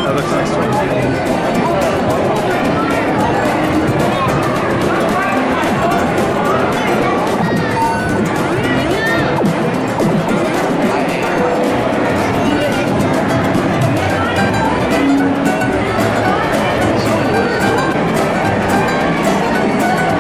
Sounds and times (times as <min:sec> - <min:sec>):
Music: 0:00.0 - 0:20.2
Speech: 0:00.0 - 0:20.2.